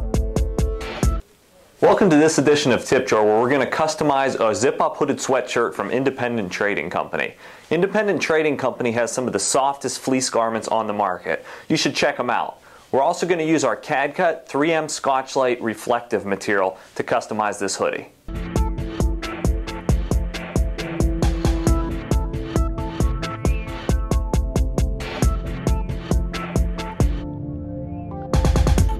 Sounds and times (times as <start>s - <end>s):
Music: 0.0s - 1.2s, 18.3s - 28.9s
Speech: 1.6s - 18.2s.